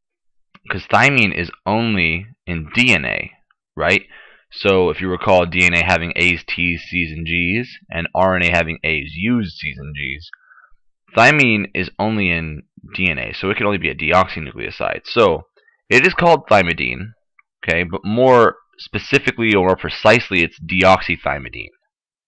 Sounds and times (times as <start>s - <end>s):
Narration, monologue: 0.1s - 22.1s.